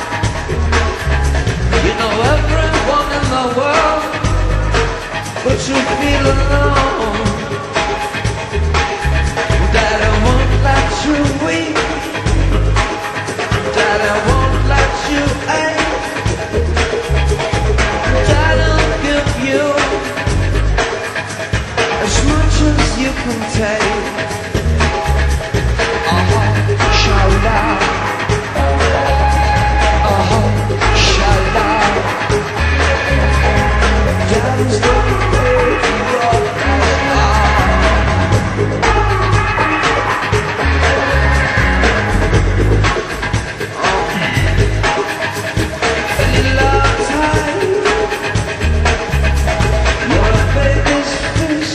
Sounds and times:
Music: 0:00.0 - 0:51.7
Singing: 0:33.6 - 0:41.5.

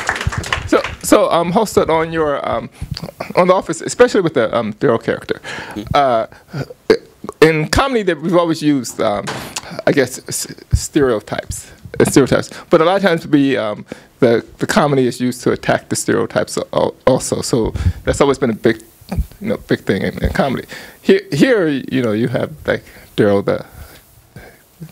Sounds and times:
Speech: 0:00.7 - 0:23.8.

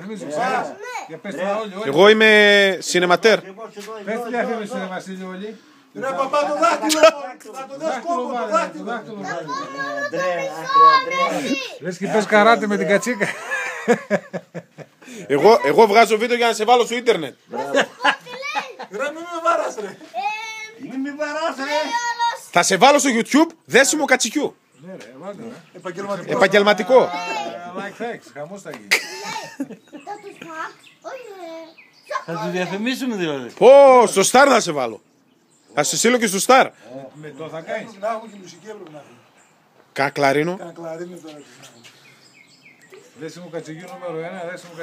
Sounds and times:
Laughter: 0:13.1 - 0:15.3, 0:17.5 - 0:20.0, 0:28.8 - 0:30.5.

